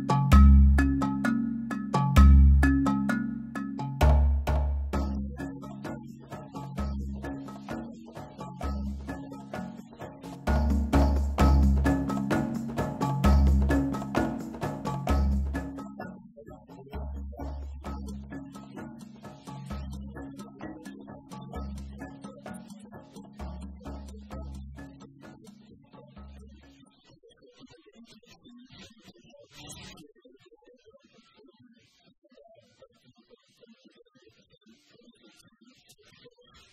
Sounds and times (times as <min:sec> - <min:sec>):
Music: 0:00.0 - 0:27.0
Speech: 0:26.3 - 0:36.7.